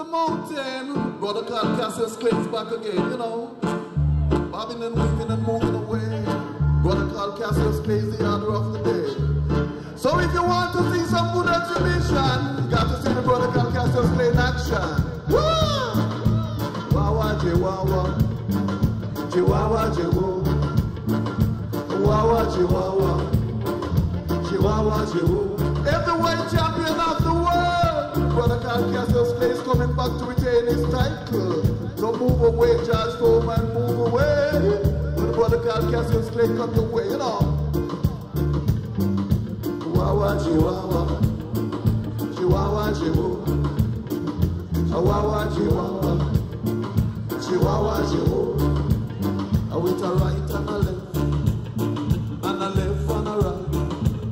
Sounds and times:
Music: 0:00.0 - 0:54.3.

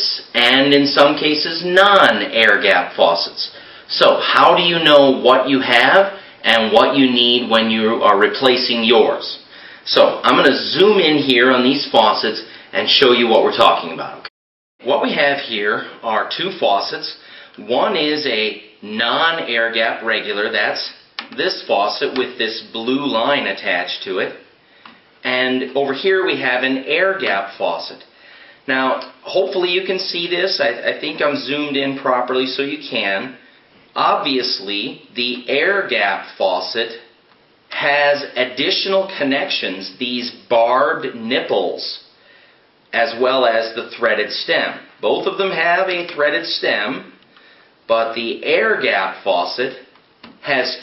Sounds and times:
Speech: 0:00.0 - 0:24.5, 0:25.2 - 0:28.1, 0:28.7 - 0:33.4, 0:34.0 - 0:37.1, 0:37.7 - 0:42.1, 0:42.9 - 0:47.2, 0:47.9 - 0:50.8.

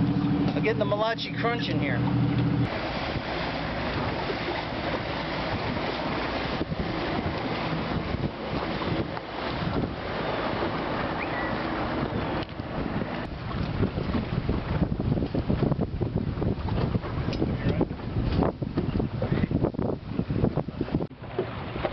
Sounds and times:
Outside, rural or natural: 0:00.0 - 0:21.9.

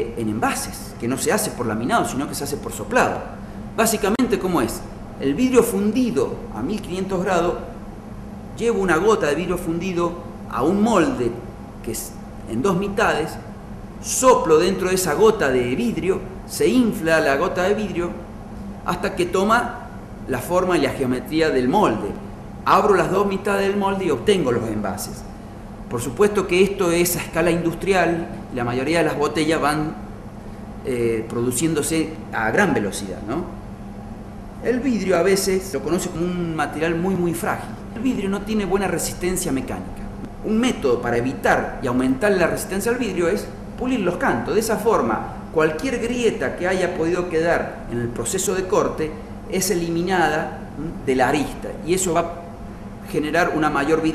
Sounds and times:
Speech: 0:00.0 - 0:07.7, 0:08.6 - 0:18.2, 0:18.9 - 0:25.3, 0:25.9 - 0:30.0, 0:30.8 - 0:33.6, 0:34.6 - 0:52.4, 0:53.0 - 0:54.1.

